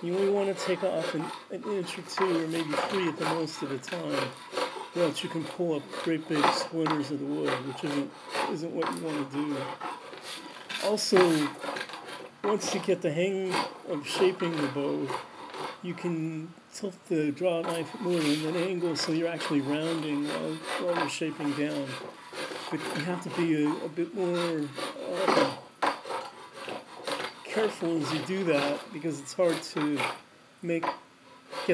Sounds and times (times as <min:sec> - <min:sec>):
Filing (rasp): 0:00.0 - 0:15.8, 0:17.5 - 0:30.2, 0:30.9 - 0:31.7
Rub: 0:00.0 - 0:15.8, 0:17.5 - 0:30.2, 0:31.3 - 0:31.7
Wood: 0:00.0 - 0:15.8, 0:17.6 - 0:30.2.